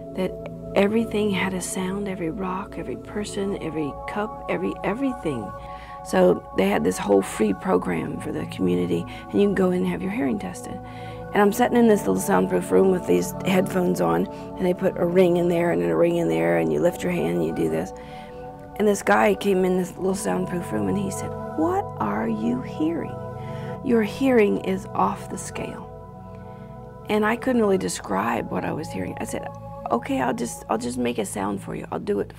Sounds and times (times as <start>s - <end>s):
Music: 0.0s - 32.3s
Speech: 0.2s - 17.9s, 18.8s - 23.2s, 23.8s - 25.9s, 27.1s - 32.3s.